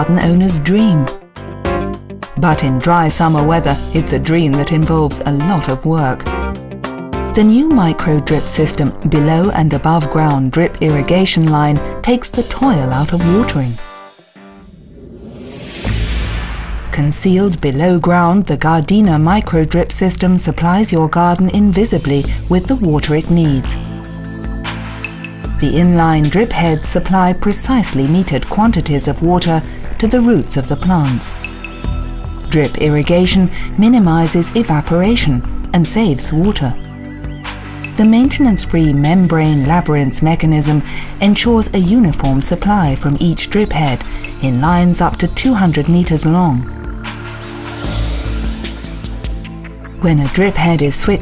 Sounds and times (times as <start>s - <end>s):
Speech: 0.0s - 1.2s, 2.4s - 6.3s, 7.4s - 13.8s, 17.0s - 23.8s, 25.6s - 31.3s, 32.5s - 36.8s, 38.0s - 46.7s, 50.0s - 51.2s
Music: 0.0s - 51.2s.